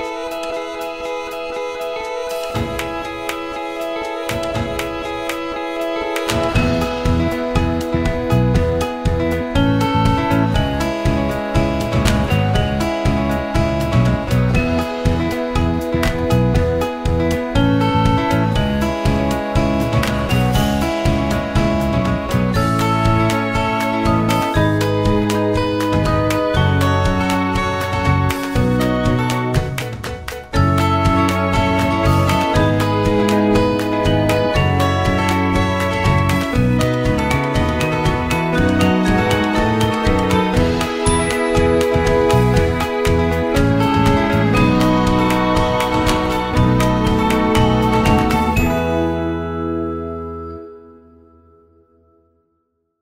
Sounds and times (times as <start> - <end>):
Music: 0.0 - 53.0.